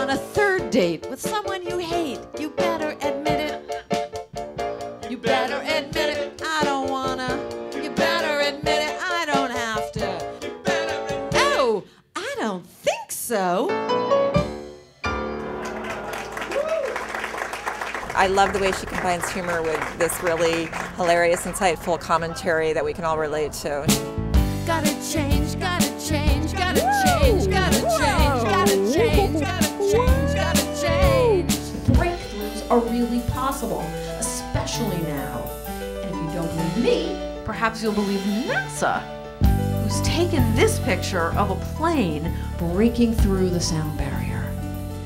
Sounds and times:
Pop music: 0.0 - 11.8, 24.0 - 42.1
Happy music: 0.0 - 11.9, 13.6 - 21.2, 23.9 - 45.0
Singing: 5.1 - 11.7, 24.8 - 31.7
Speech: 11.4 - 13.7, 18.2 - 23.9, 27.0 - 35.4, 36.0 - 39.0, 39.9 - 44.5.

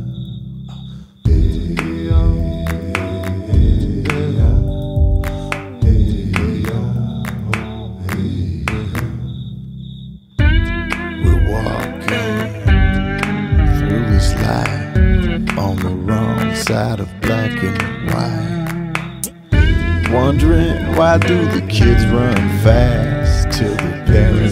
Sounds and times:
Music: 1.2 - 9.1, 10.4 - 24.5.

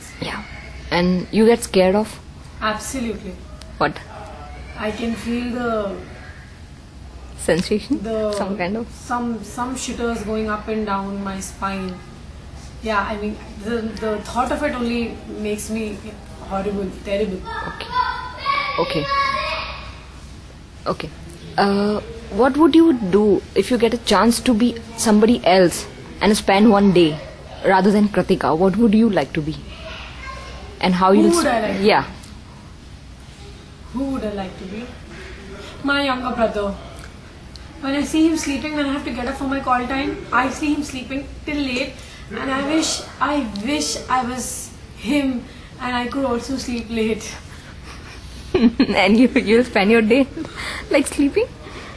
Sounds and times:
Female speech, woman speaking: 0.0 - 4.1, 7.4 - 12.0, 12.8 - 17.9, 18.8 - 19.1, 20.9 - 29.7, 30.8 - 32.2, 33.9 - 35.0, 35.8 - 36.9, 37.8 - 47.4, 48.9 - 51.6.

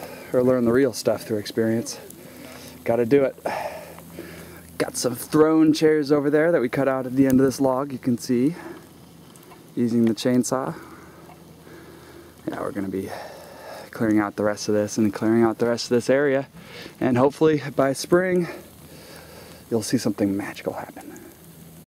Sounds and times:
Speech: 0.3 - 2.1, 2.8 - 3.4, 4.8 - 8.7, 9.8 - 10.8, 12.4 - 13.2, 13.9 - 18.6, 19.7 - 21.2.

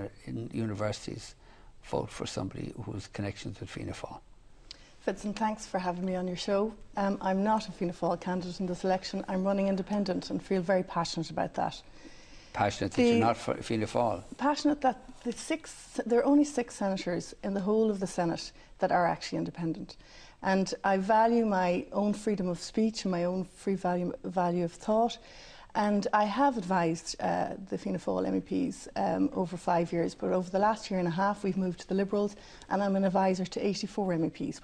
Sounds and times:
Female speech, woman speaking: 5.0 - 11.8, 12.9 - 13.3, 14.4 - 25.2, 25.8 - 34.6.

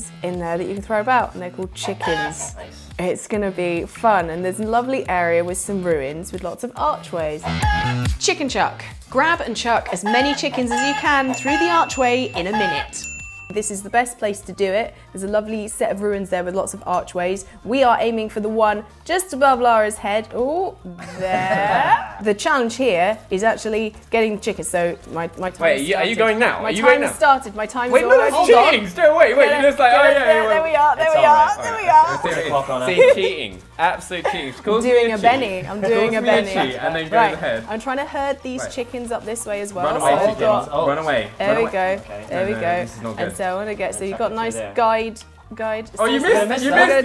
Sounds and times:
Music: 0.0 - 47.0.

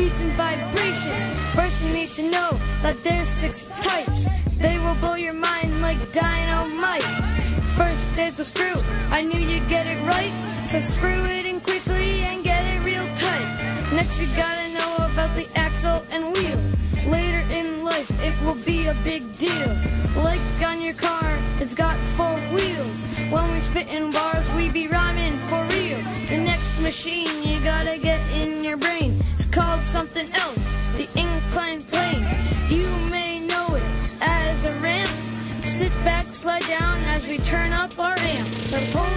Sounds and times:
Hip hop music: 0.0 - 39.1.

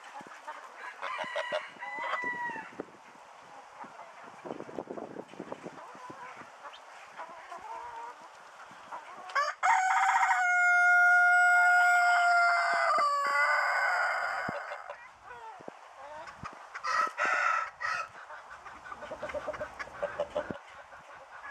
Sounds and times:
Duck: 17.9 - 21.5
Goose: 17.9 - 21.5.

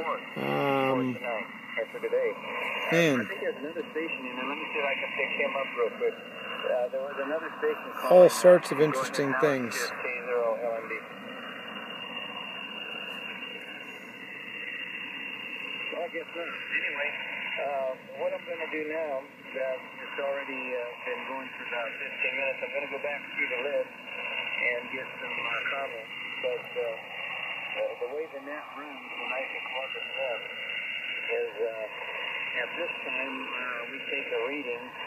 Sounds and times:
Radio: 0.0 - 11.0, 15.9 - 23.9, 24.6 - 30.6, 31.2 - 35.0.

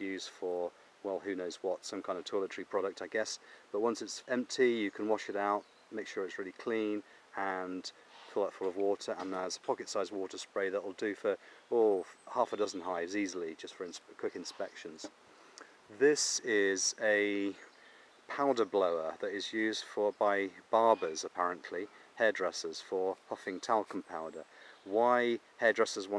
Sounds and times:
Speech: 0.0 - 15.1, 15.9 - 17.7, 18.3 - 26.1.

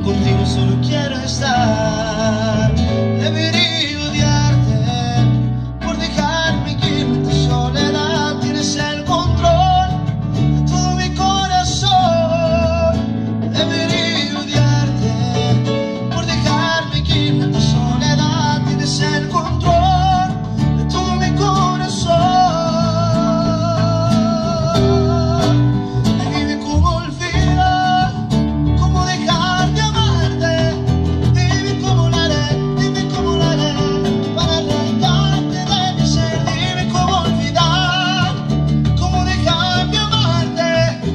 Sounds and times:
Music: 0.0 - 41.1.

